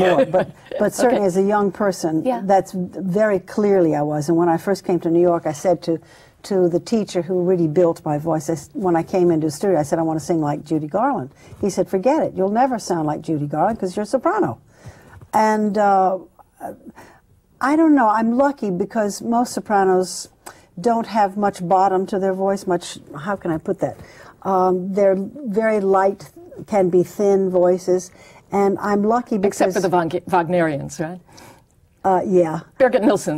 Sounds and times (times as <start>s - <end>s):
Female speech, woman speaking: 0.0s - 14.6s, 15.4s - 16.8s, 17.6s - 31.2s, 32.0s - 33.3s.